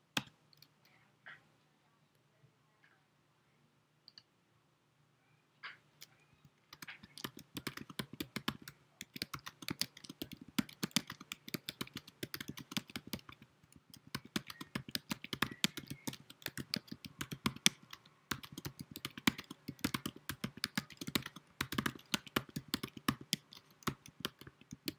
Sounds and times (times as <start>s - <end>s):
Typing: 6.7s - 24.9s.